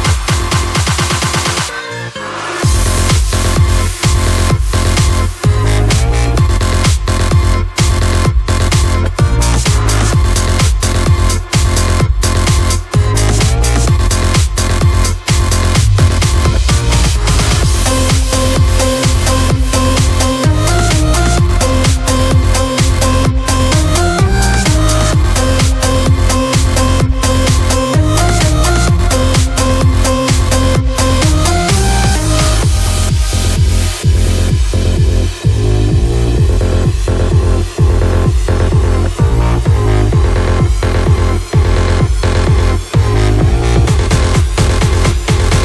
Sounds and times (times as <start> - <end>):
Music: 0.0 - 45.6.